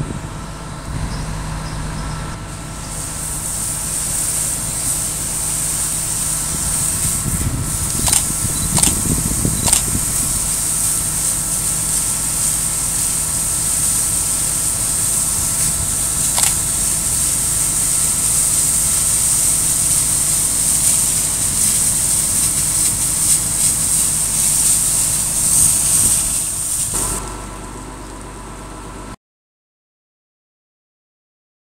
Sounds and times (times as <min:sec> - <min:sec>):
Spray: 0:02.8 - 0:27.7.